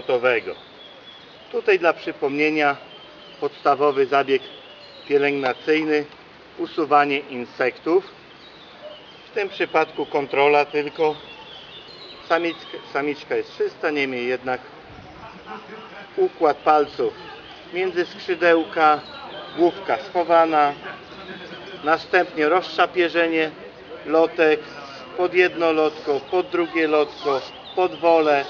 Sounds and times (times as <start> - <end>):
Male speech, man speaking: 0.0 - 0.6, 1.5 - 2.8, 3.4 - 4.5, 5.1 - 8.1, 9.4 - 11.2, 12.3 - 28.5
Outside, rural or natural: 0.0 - 28.5.